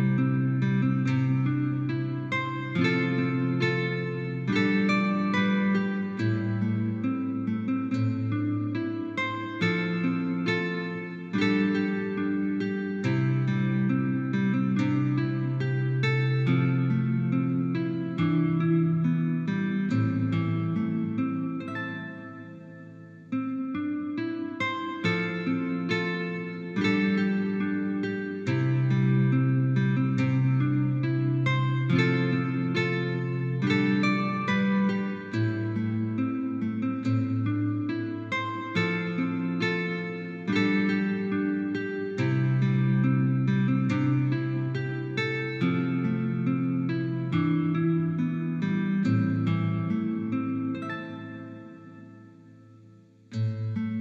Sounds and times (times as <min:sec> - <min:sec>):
Guitar: 0:00.0 - 0:54.0.